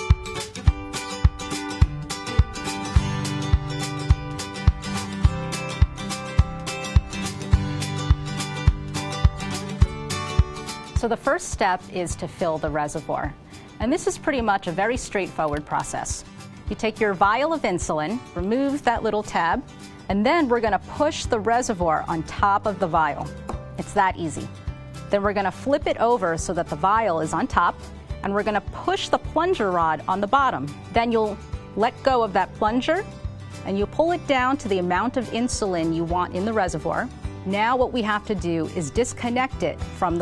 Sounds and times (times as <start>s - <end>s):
Music: 0.0s - 40.2s
Speech: 11.0s - 24.5s, 25.1s - 33.0s, 33.7s - 40.2s.